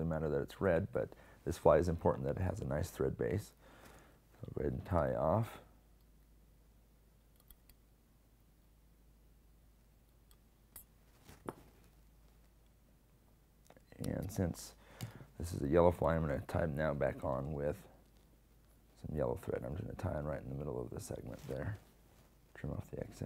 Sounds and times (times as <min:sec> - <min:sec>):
Speech: 0:00.0 - 0:03.6, 0:04.4 - 0:05.7, 0:13.9 - 0:14.8, 0:15.4 - 0:18.0, 0:19.0 - 0:21.9, 0:22.5 - 0:23.2.